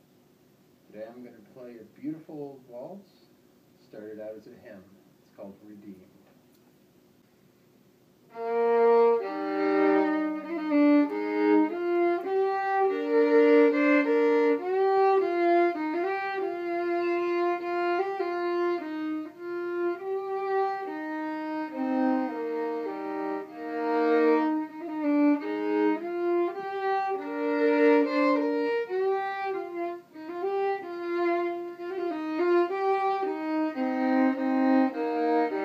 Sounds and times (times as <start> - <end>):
Violin, fiddle: 8.3 - 35.6.